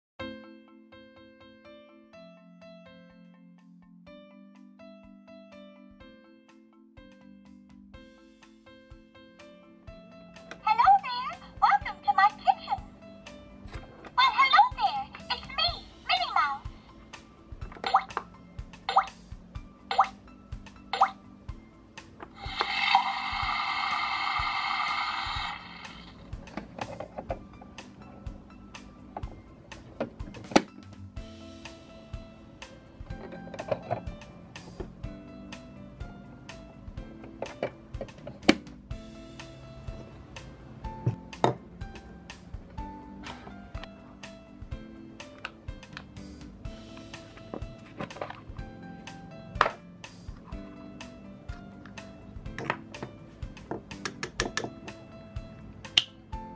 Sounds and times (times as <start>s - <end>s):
Music: 0.2s - 56.5s.